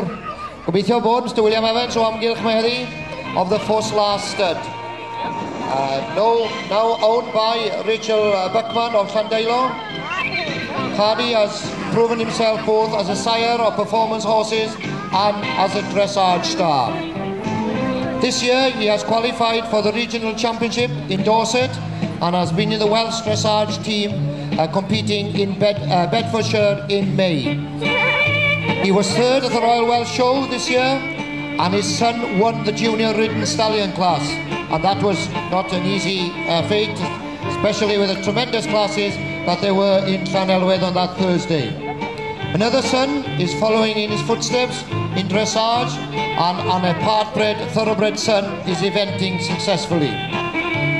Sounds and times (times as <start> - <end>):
Speech: 0.0 - 4.7, 5.7 - 17.1, 18.2 - 27.6, 28.8 - 31.0, 31.6 - 41.8, 42.5 - 50.2
Music: 0.0 - 50.9.